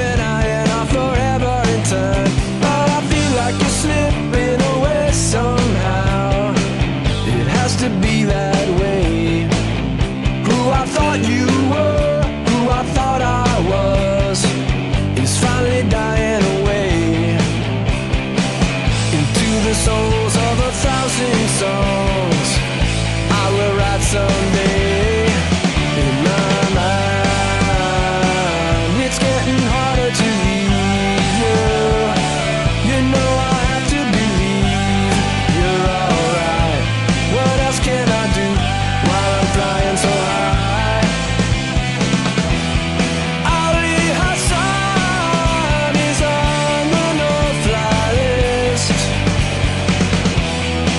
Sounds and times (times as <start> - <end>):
Grunge: 0.0 - 50.9.